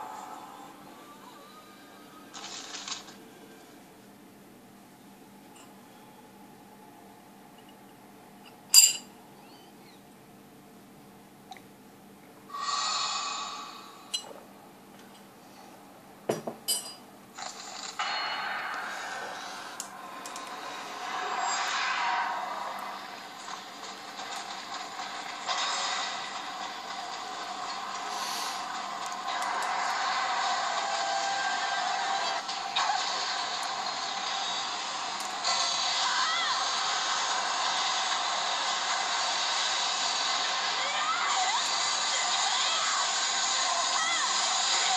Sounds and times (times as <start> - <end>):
Dishes, pots, and pans: 8.8 - 9.1, 16.3 - 17.0.